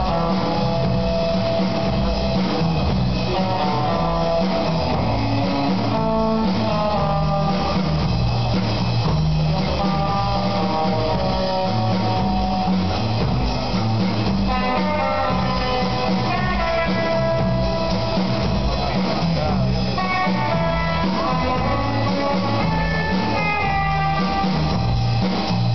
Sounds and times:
Music: 0.0 - 25.7.

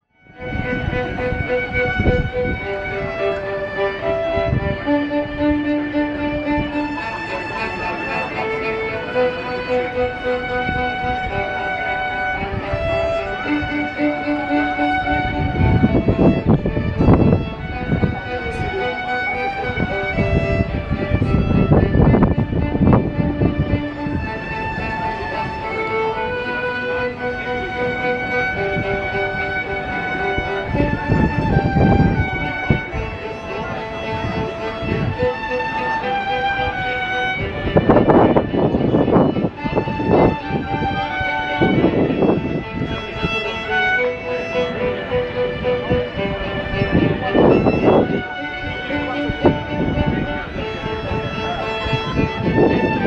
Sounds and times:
Violin, fiddle: 0.0 - 53.0.

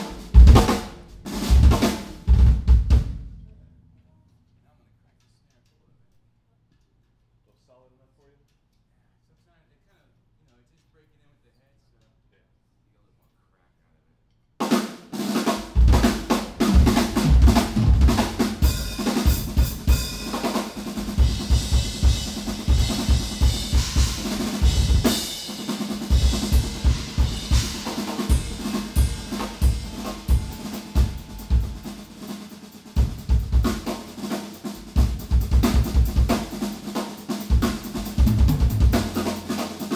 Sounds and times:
Music: 0.0 - 3.7, 14.6 - 39.9.

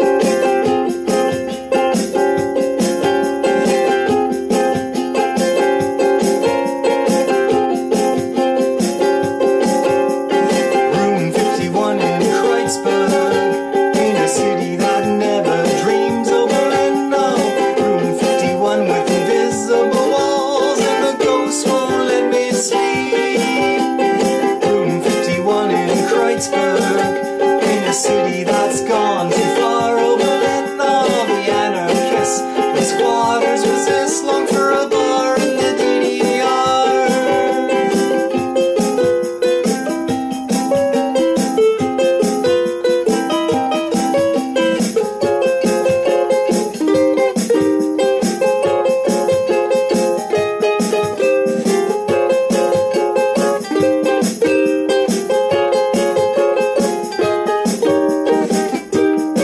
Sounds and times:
Ukulele: 0.0 - 59.4.

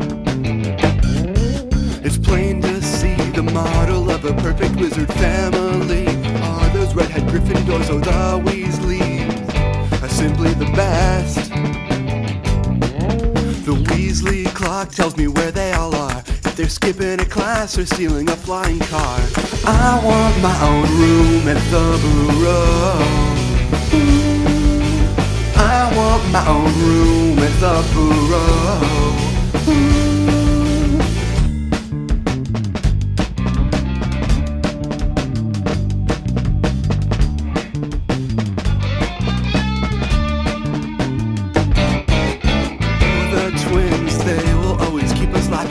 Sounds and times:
Music: 0.0 - 45.7.

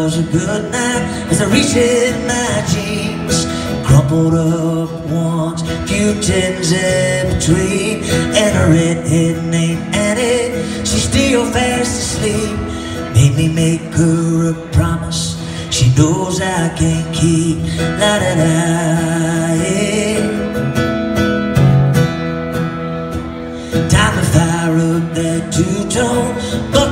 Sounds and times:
Acoustic guitar: 0.0 - 26.9.

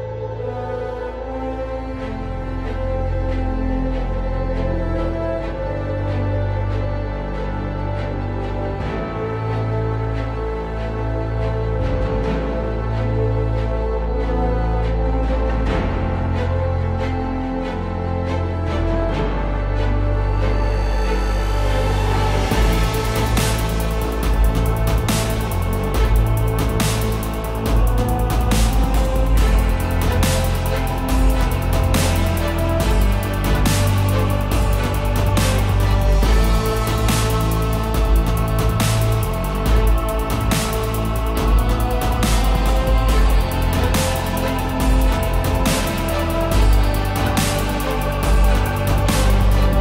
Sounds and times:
Music: 0.0 - 49.8.

